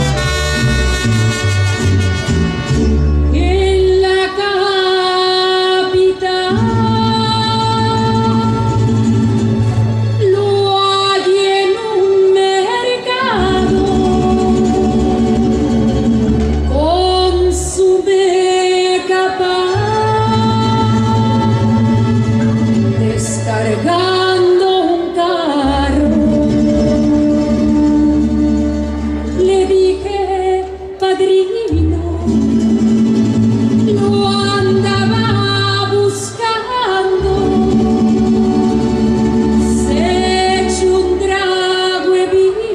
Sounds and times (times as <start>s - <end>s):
Independent music: 0.0s - 42.7s.